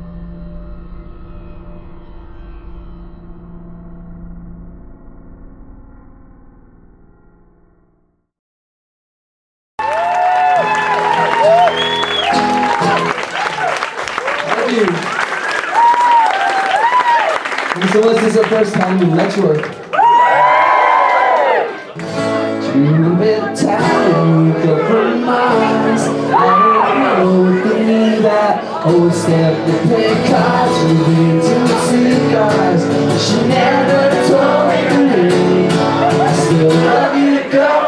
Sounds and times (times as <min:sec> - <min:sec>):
Blues: 0:20.5 - 0:37.8.